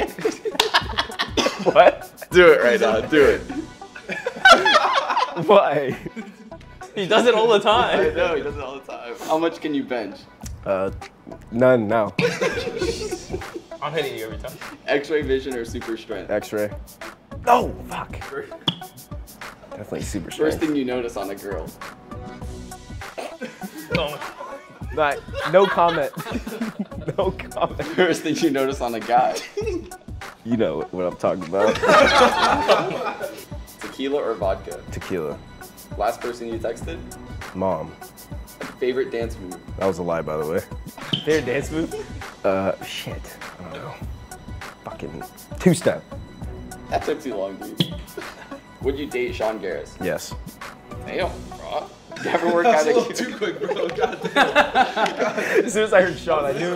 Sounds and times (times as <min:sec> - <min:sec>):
Music: 0:00.0 - 0:56.7.